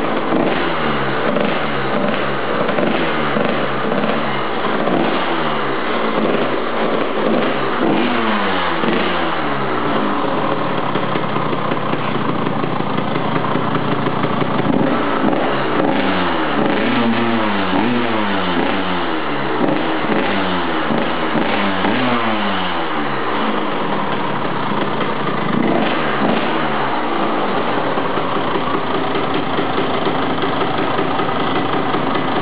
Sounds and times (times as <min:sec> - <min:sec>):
Idling: 0:00.0 - 0:32.4
Motorcycle: 0:00.0 - 0:32.4.